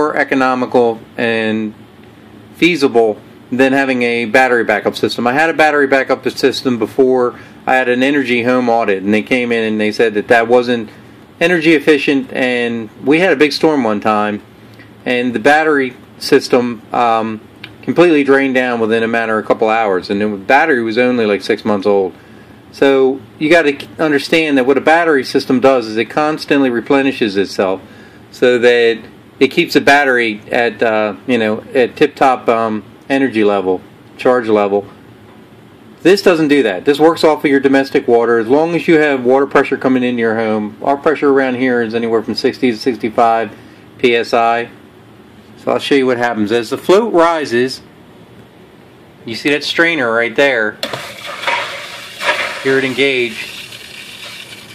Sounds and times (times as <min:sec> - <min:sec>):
Water: 0:50.8 - 0:54.7.